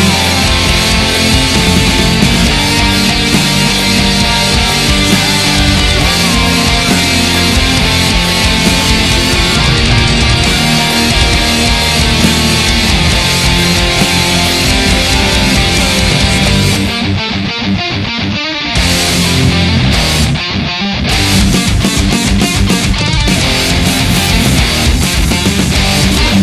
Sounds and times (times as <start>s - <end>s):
Drum: 0.0s - 17.1s, 18.8s - 20.4s, 21.1s - 26.4s
Drum kit: 0.0s - 17.2s, 18.8s - 20.4s, 21.1s - 26.4s
Electric guitar: 0.0s - 26.4s.